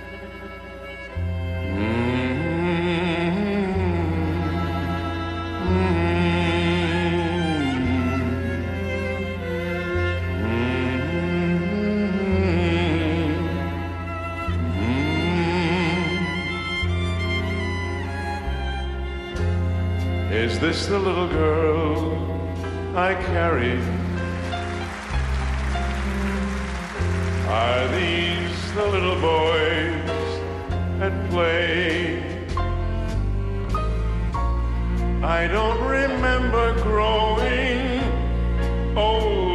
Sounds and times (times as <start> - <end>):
Music: 0.0 - 39.5.